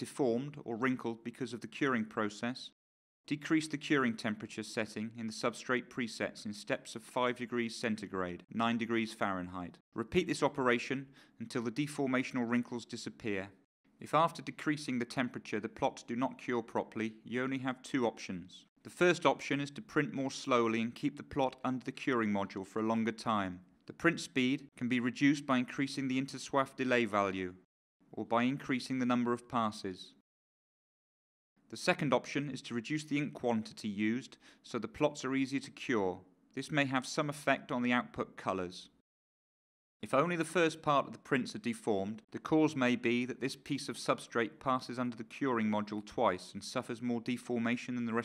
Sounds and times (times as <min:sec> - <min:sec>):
Speech: 0:00.0 - 0:30.2, 0:31.7 - 0:39.0, 0:40.0 - 0:48.2.